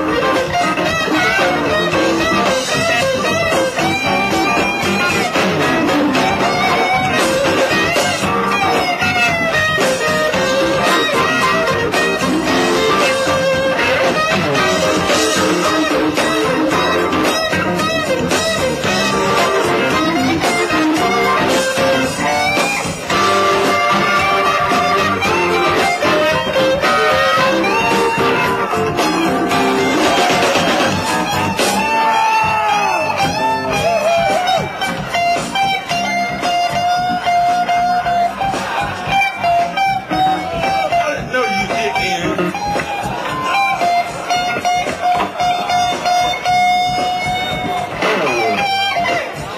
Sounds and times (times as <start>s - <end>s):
Electric guitar: 0.0s - 49.5s.